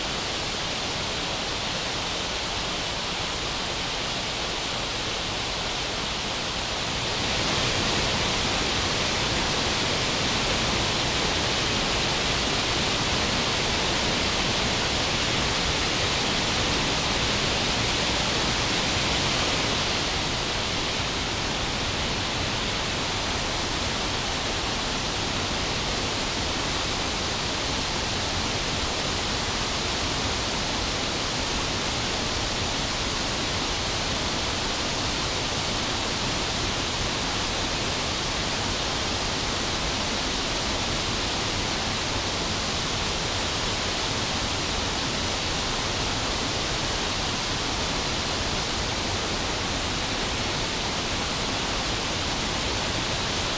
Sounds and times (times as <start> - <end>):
Waterfall: 0.0 - 53.5.